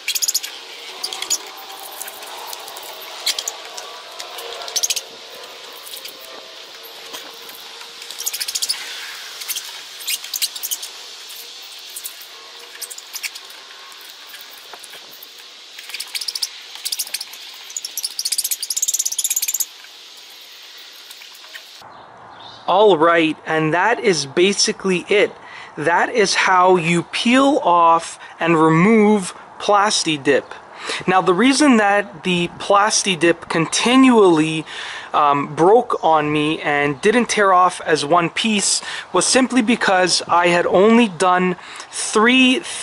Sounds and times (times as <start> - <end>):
Outside, rural or natural: 0.0 - 42.8.